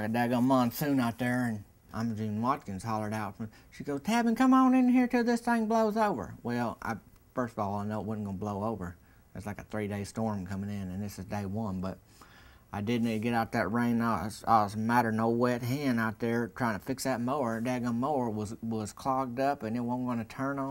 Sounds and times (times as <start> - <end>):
Speech: 0.0 - 12.0, 12.7 - 20.7.